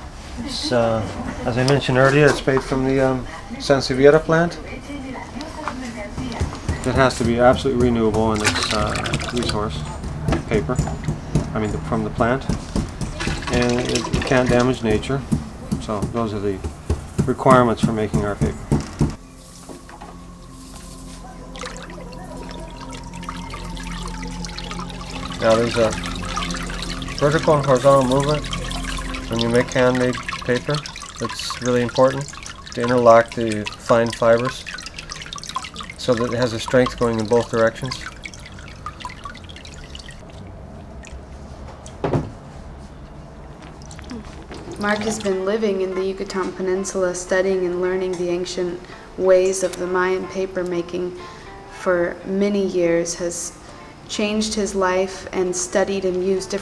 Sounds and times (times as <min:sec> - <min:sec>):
Water: 0:00.0 - 0:18.5, 0:19.7 - 0:42.0, 0:42.9 - 0:47.1.